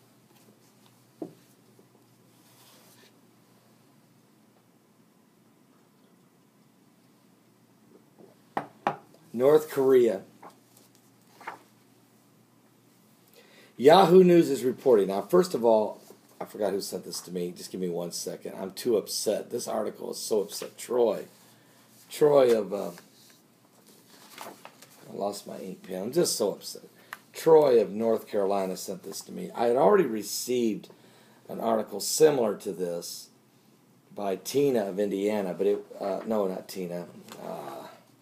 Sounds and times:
Speech: 9.3s - 10.3s, 13.8s - 21.4s, 22.1s - 23.1s, 25.0s - 30.9s, 31.5s - 33.4s, 34.1s - 38.0s.

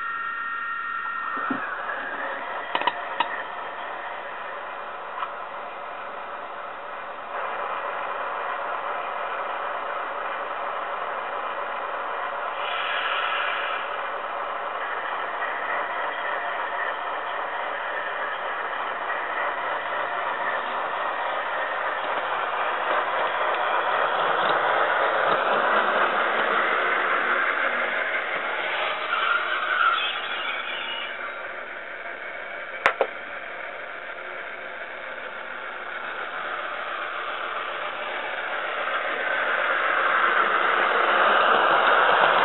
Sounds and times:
Microwave oven: 0.0s - 7.9s.

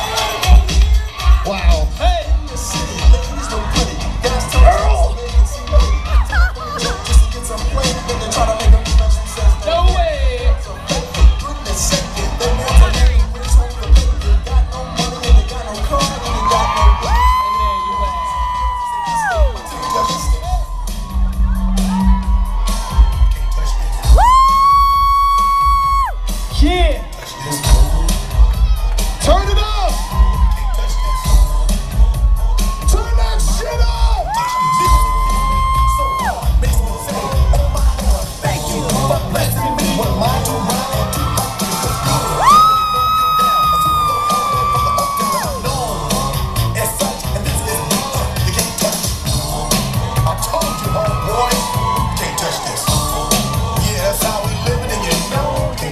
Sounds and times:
Singing: 0.0s - 29.3s, 29.9s - 55.9s
Music of Latin America: 0.0s - 55.9s.

